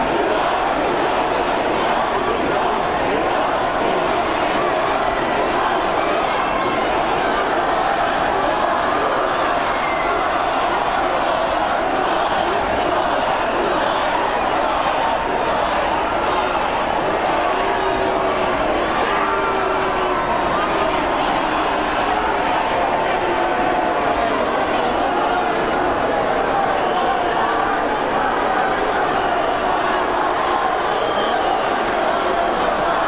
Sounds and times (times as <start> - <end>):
Crowd: 0.0 - 33.0.